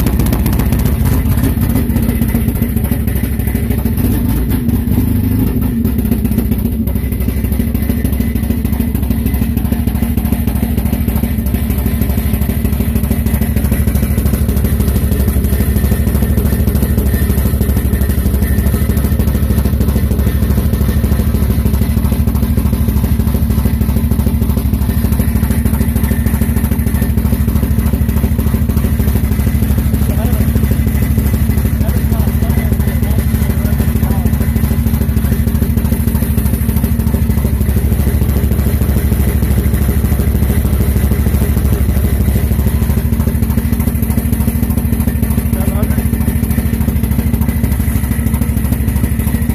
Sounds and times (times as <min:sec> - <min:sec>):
Vehicle: 0:00.0 - 0:49.5.